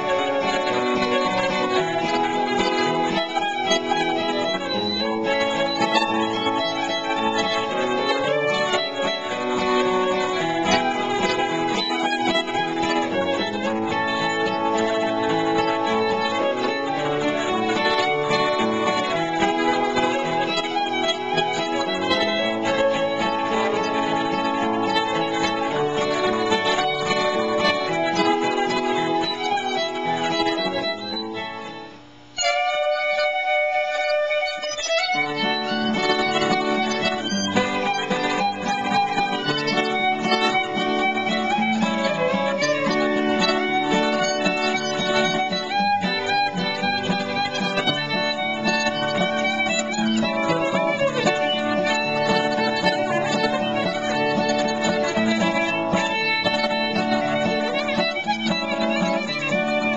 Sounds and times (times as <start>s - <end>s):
Pizzicato: 0.0s - 31.6s, 32.5s - 59.9s.